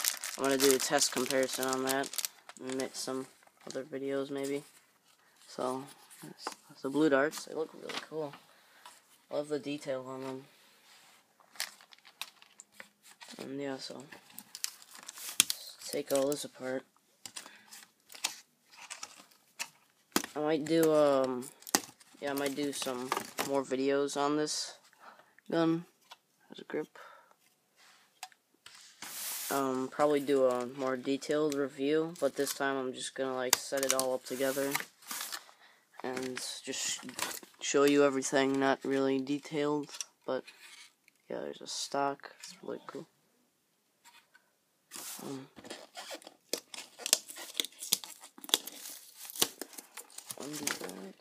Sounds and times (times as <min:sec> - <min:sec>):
Inside, small room: 0:00.0 - 0:51.2
Speech: 0:00.4 - 0:04.7, 0:05.5 - 0:08.4, 0:09.3 - 0:10.5, 0:13.4 - 0:14.1, 0:15.6 - 0:16.9, 0:20.4 - 0:21.6, 0:22.2 - 0:24.8, 0:25.5 - 0:25.9, 0:26.5 - 0:27.1, 0:29.5 - 0:34.9, 0:36.0 - 0:40.5, 0:41.3 - 0:43.1, 0:45.2 - 0:45.6, 0:50.4 - 0:51.2.